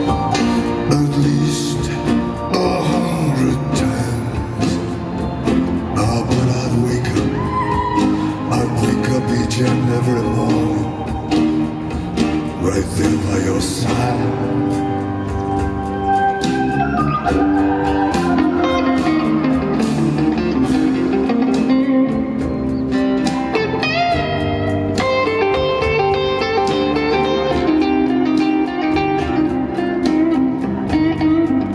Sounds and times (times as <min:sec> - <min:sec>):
Music: 0:00.0 - 0:31.7.